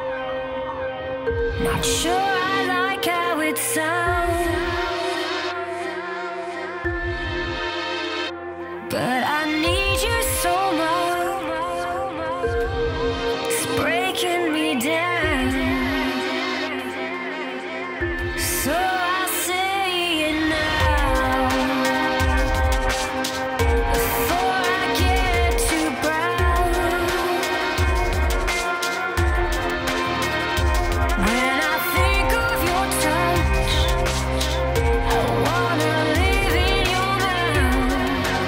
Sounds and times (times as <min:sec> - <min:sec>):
Music: 0:00.0 - 0:38.4.